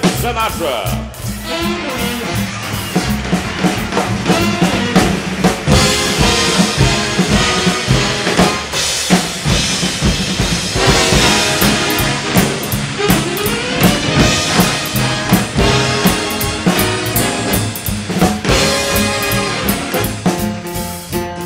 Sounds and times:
Drum: 0.0 - 21.4
Drum kit: 0.0 - 21.4.

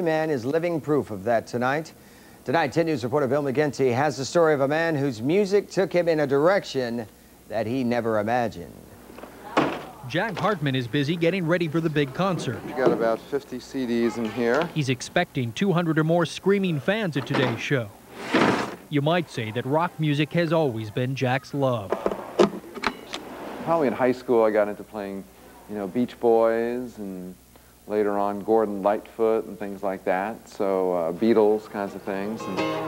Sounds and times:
Speech: 0.0 - 8.8, 10.0 - 18.0, 18.9 - 22.0, 23.7 - 32.7
Music: 32.2 - 32.8.

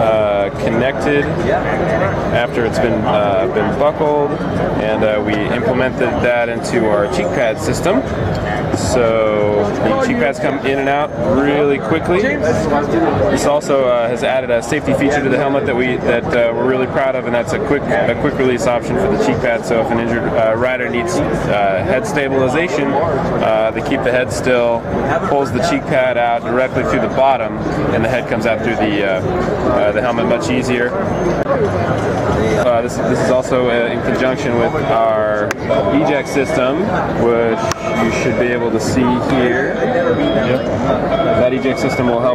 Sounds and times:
Speech: 0.0 - 42.3.

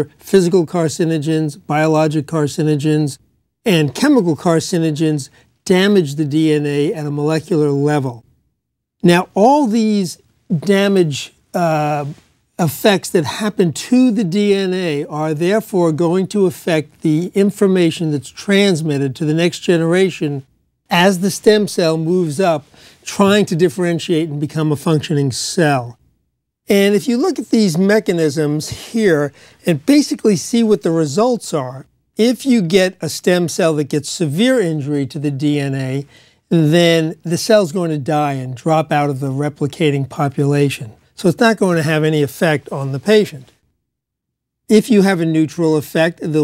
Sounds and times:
Speech: 0.0 - 8.2, 9.0 - 26.0, 26.7 - 43.6, 44.7 - 46.4.

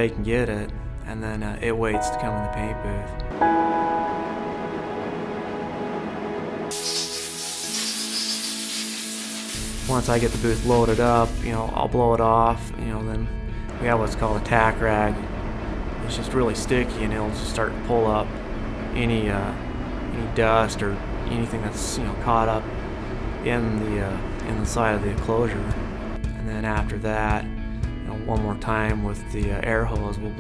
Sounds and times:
Speech: 0.0 - 3.2, 9.9 - 15.2, 16.0 - 18.3, 19.0 - 19.6, 20.2 - 22.6, 23.4 - 30.4
Music: 0.0 - 30.4.

